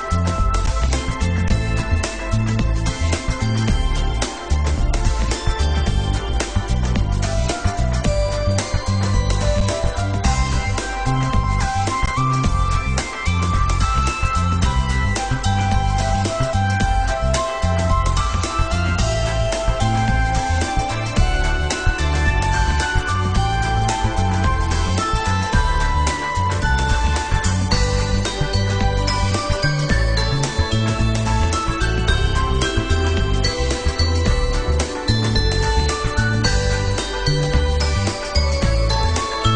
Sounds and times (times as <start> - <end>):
Music: 0.0 - 39.5.